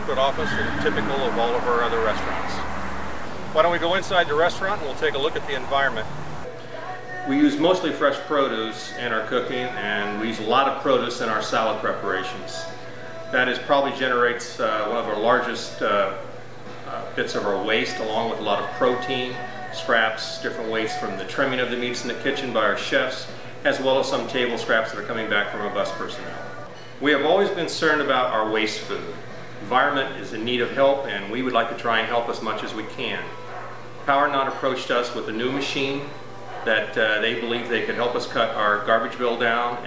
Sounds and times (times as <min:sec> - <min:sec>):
Speech: 0:00.0 - 0:02.6, 0:03.5 - 0:06.1, 0:07.3 - 0:12.7, 0:13.3 - 0:16.3, 0:16.9 - 0:33.4, 0:34.1 - 0:39.8
Music: 0:00.0 - 0:39.8.